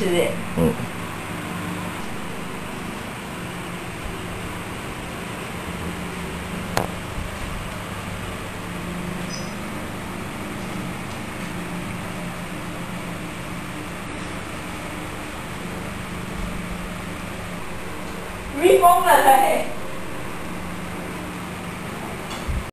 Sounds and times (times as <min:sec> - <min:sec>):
Speech: 0:00.0 - 0:00.8, 0:18.5 - 0:19.8.